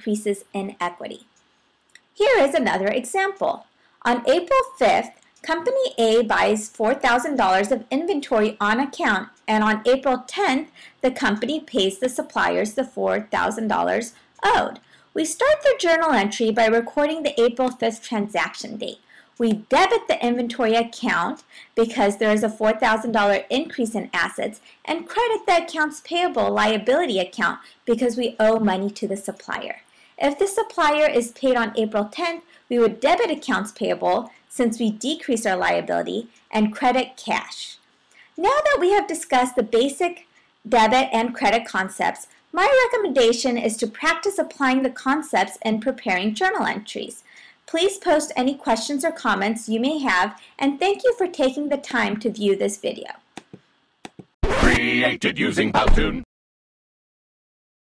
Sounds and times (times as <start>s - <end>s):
Speech: 0.0s - 1.3s, 2.2s - 37.8s, 38.4s - 53.2s, 54.5s - 56.3s.